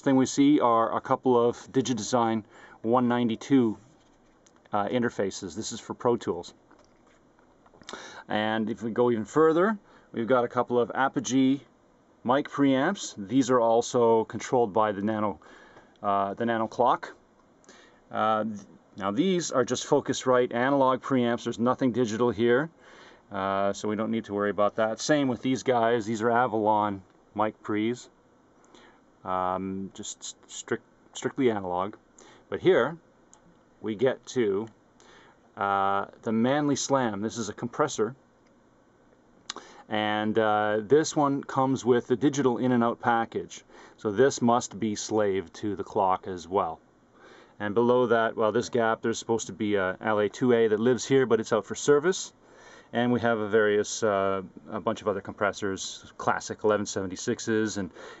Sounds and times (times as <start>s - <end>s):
Speech: 0.0s - 3.9s, 4.7s - 6.6s, 8.2s - 15.4s, 16.0s - 17.2s, 18.1s - 28.1s, 29.2s - 33.0s, 33.8s - 34.7s, 35.6s - 38.2s, 39.9s - 46.8s, 47.6s - 58.0s.